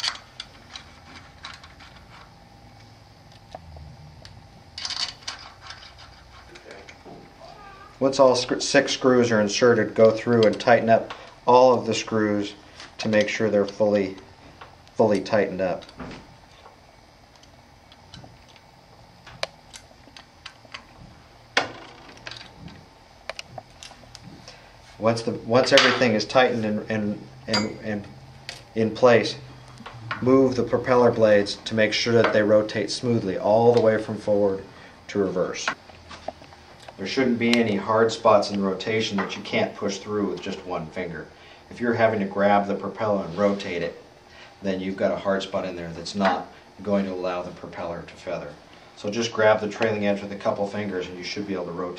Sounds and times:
Speech: 6.5s - 14.3s, 15.0s - 15.9s, 25.0s - 28.1s, 28.8s - 29.4s, 30.2s - 35.8s, 37.0s - 44.0s, 44.6s - 51.9s.

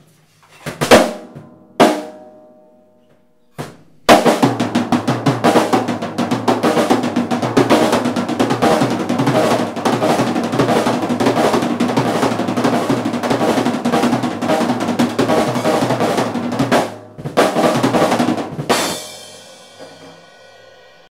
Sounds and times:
Drum kit: 0.6s - 2.5s, 3.4s - 21.1s
Bass drum: 3.6s - 21.1s.

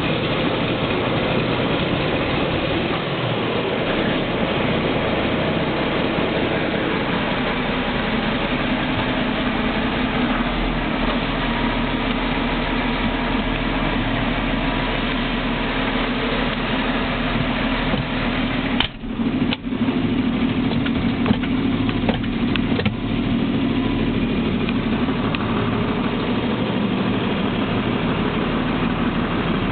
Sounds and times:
Heavy engine (low frequency): 0.0s - 29.7s
Vehicle: 0.0s - 29.7s.

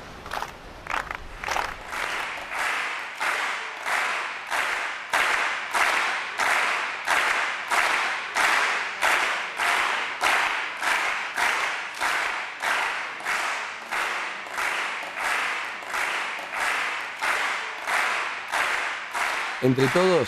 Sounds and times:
Applause: 0.2s - 20.2s.

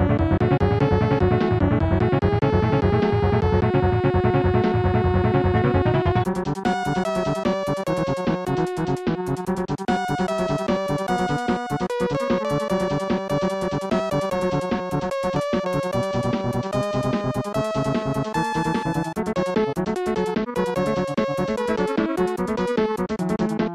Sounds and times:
Soundtrack music: 0.0s - 23.7s.

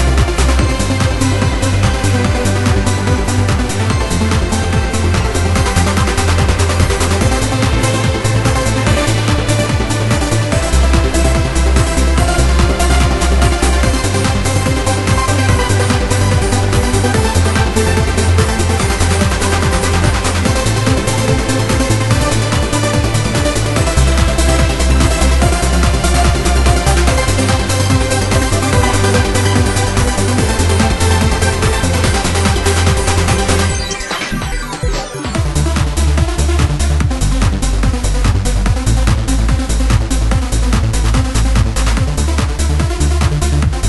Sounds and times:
Music: 0.0s - 43.8s.

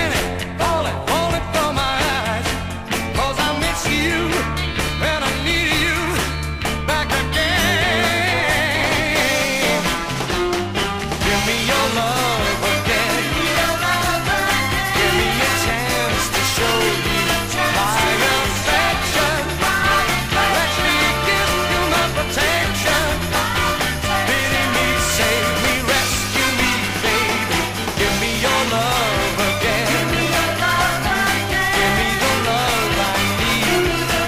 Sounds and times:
Music: 0.0s - 34.2s.

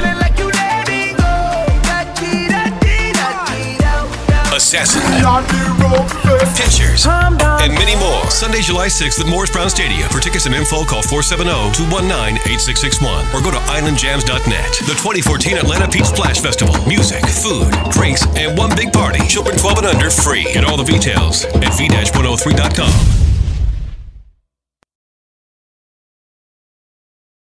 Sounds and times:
Music: 0.0s - 23.2s
Speech: 4.5s - 23.0s.

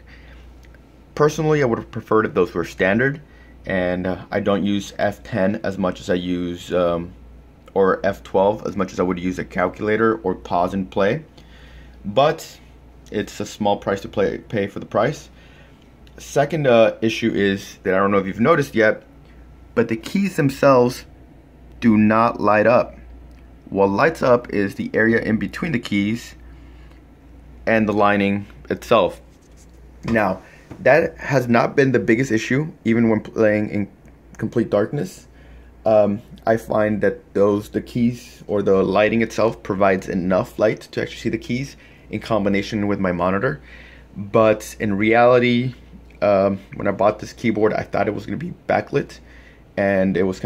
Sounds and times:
Speech: 1.2s - 11.3s, 12.0s - 15.4s, 16.1s - 19.1s, 19.8s - 21.1s, 21.8s - 23.0s, 23.6s - 26.4s, 27.6s - 29.3s, 30.0s - 43.6s, 44.2s - 49.2s, 49.8s - 50.4s.

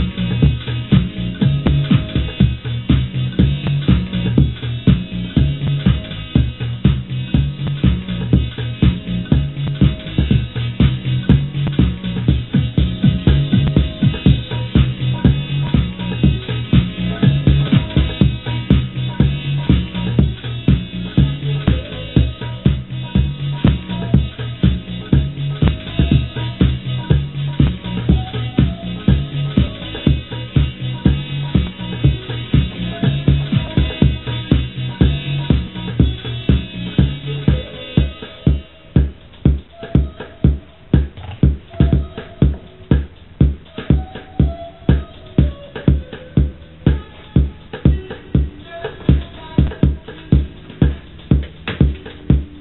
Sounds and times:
House music: 0.0s - 52.6s.

